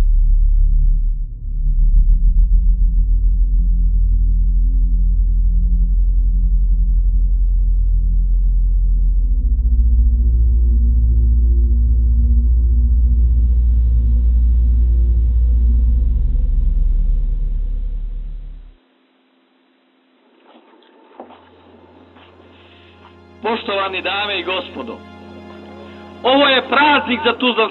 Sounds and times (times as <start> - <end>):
Music: 0.0 - 27.7.